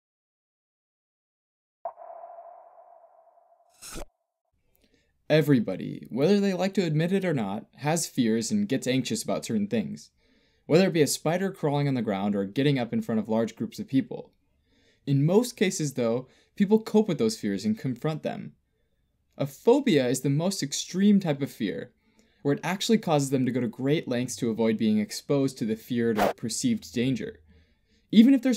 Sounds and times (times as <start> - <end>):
Speech: 5.3 - 10.1, 10.7 - 14.3, 15.1 - 18.6, 19.4 - 27.4, 28.1 - 28.5.